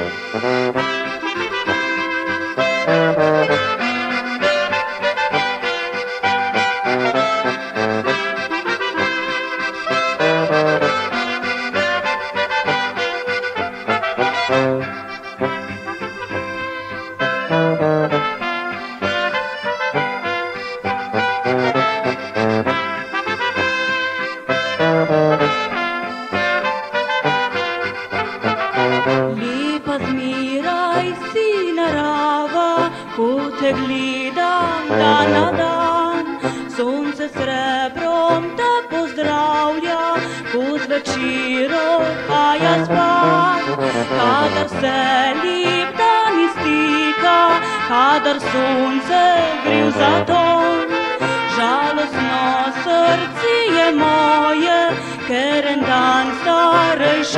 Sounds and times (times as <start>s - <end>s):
Trumpet: 0.0s - 29.5s, 34.7s - 35.8s, 42.3s - 53.1s.